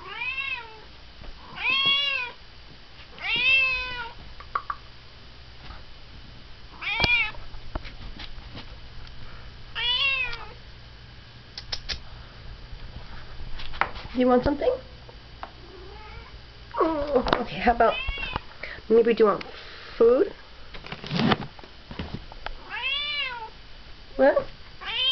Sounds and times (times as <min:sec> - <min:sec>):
Meow: 0:00.0 - 0:00.9, 0:01.6 - 0:02.4, 0:03.2 - 0:04.2, 0:06.8 - 0:07.4, 0:09.8 - 0:10.6, 0:15.8 - 0:16.3, 0:17.9 - 0:18.4, 0:22.7 - 0:23.5, 0:24.8 - 0:25.1
Speech: 0:14.2 - 0:14.9, 0:18.9 - 0:20.4, 0:24.2 - 0:24.5.